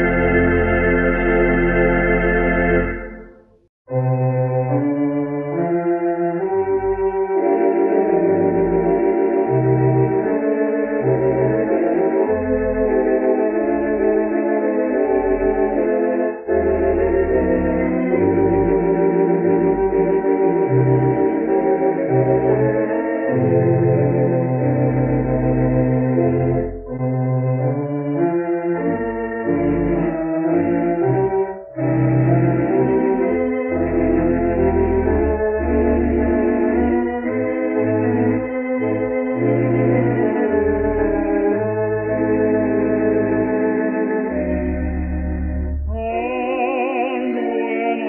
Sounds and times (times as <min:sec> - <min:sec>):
Organ: 0:00.0 - 0:48.0.